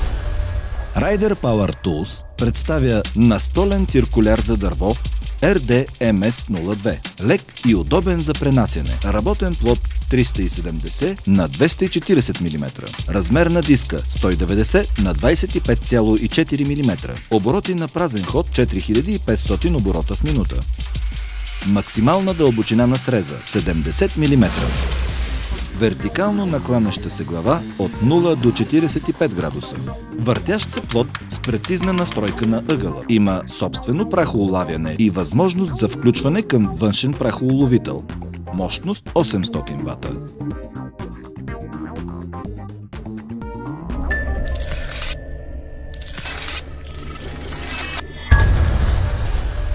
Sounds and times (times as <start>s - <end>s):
Music: 0.0s - 49.7s
Speech: 1.0s - 20.6s, 21.6s - 24.8s, 25.8s - 40.2s.